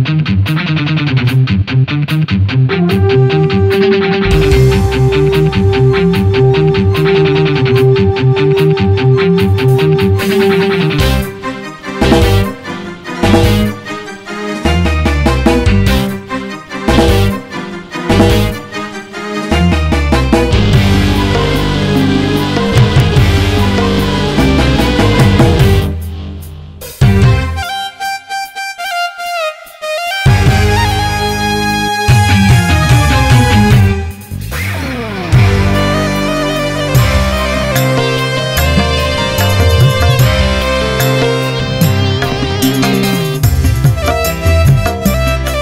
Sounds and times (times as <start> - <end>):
Music: 0.0 - 45.6.